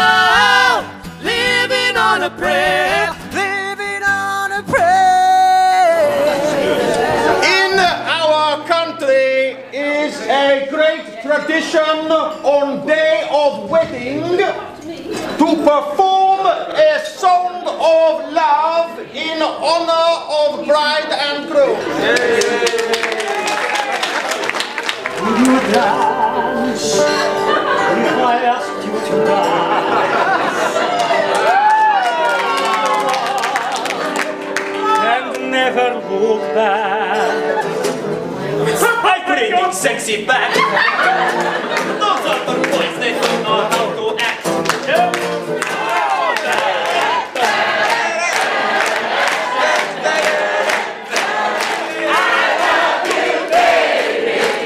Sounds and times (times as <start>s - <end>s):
Speech: 7.4s - 22.6s, 38.6s - 40.6s.